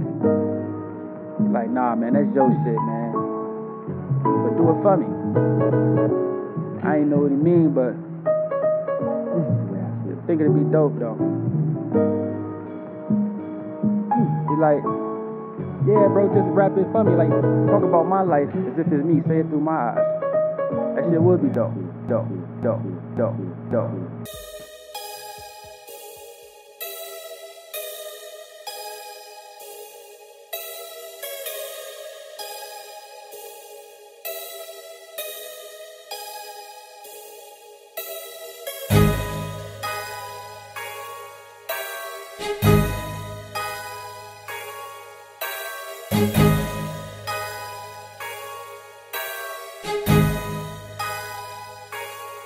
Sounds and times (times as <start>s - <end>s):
Music: 0.0s - 52.4s
Speech: 1.5s - 3.2s, 4.4s - 5.2s, 6.8s - 8.0s, 9.3s - 11.2s, 14.2s - 14.9s, 15.9s - 20.0s, 21.0s - 24.0s.